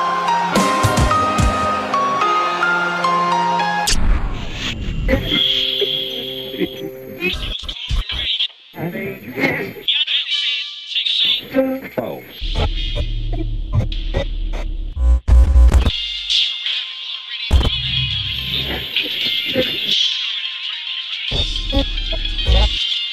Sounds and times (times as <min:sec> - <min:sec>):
Music: 0:00.0 - 0:08.2, 0:12.4 - 0:23.1
Speech: 0:07.2 - 0:12.4.